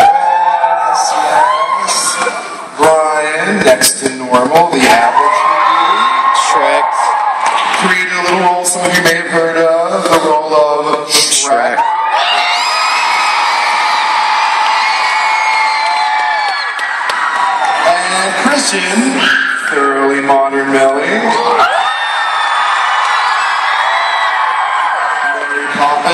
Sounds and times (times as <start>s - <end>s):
Speech: 0.8s - 5.5s, 6.3s - 7.1s, 7.8s - 11.8s, 17.8s - 21.4s, 25.6s - 26.1s.